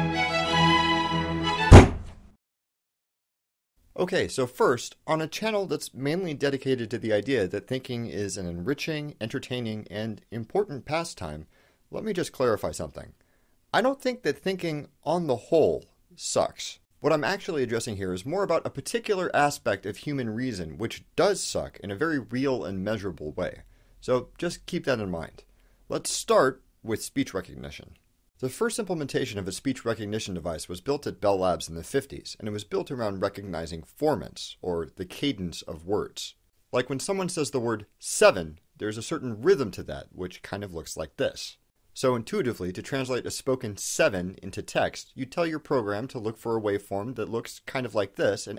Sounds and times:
Speech: 3.9s - 48.5s.

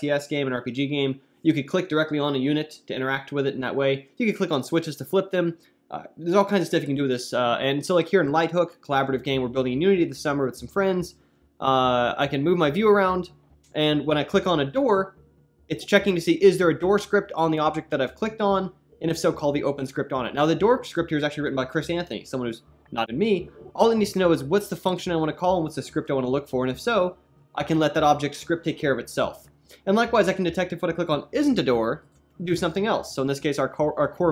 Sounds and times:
Speech: 0.0s - 34.3s.

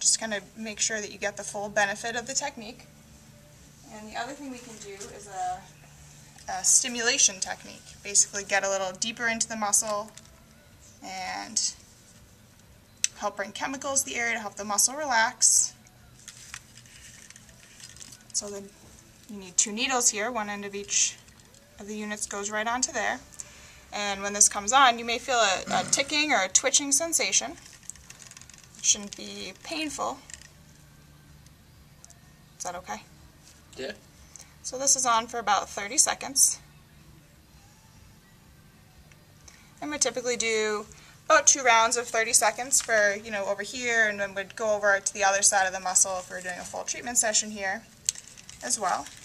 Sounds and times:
Inside, small room: 0.0s - 49.2s.

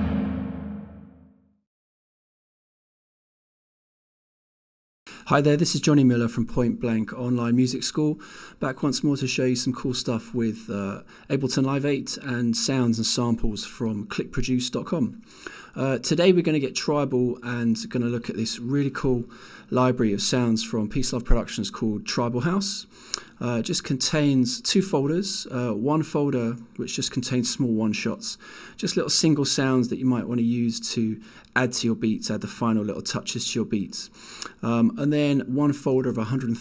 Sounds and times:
Speech: 5.2s - 15.2s, 15.8s - 36.6s.

